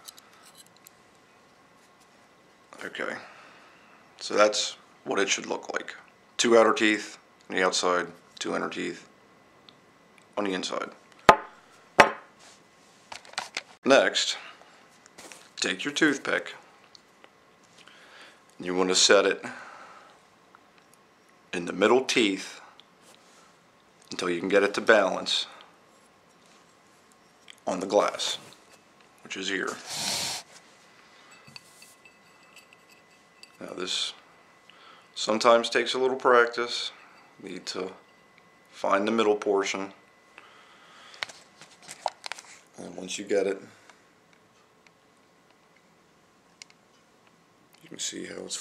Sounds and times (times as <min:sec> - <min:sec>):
Speech: 0:02.8 - 0:03.3, 0:04.2 - 0:09.1, 0:10.4 - 0:11.0, 0:13.8 - 0:14.5, 0:15.6 - 0:16.6, 0:18.6 - 0:19.6, 0:21.6 - 0:22.6, 0:24.1 - 0:25.6, 0:27.6 - 0:28.5, 0:29.2 - 0:29.8, 0:33.6 - 0:34.2, 0:35.2 - 0:38.0, 0:38.8 - 0:40.0, 0:42.8 - 0:43.8, 0:47.8 - 0:48.6.